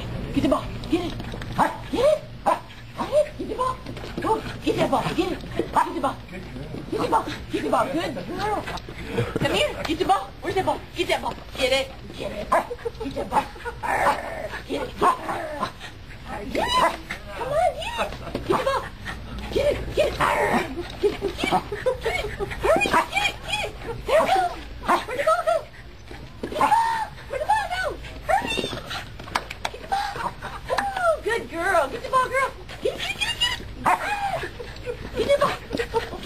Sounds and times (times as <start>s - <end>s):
Speech: 0.2s - 25.8s, 26.5s - 28.9s, 29.7s - 36.2s.